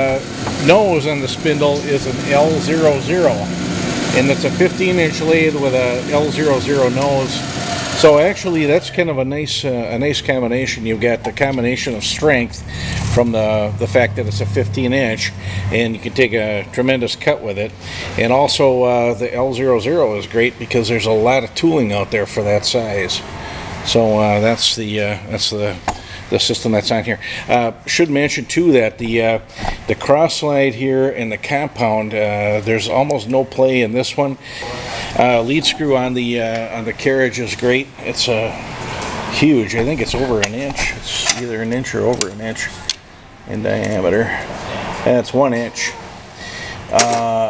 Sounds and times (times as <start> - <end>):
Speech: 0.0 - 3.5, 4.1 - 38.6, 39.3 - 42.8, 43.5 - 46.1, 46.9 - 47.4.